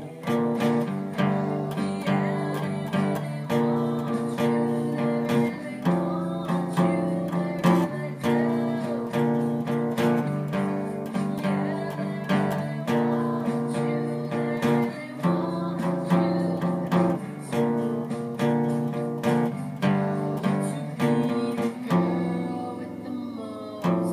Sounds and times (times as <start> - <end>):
Acoustic guitar: 0.0 - 24.1
Strum: 0.0 - 24.1.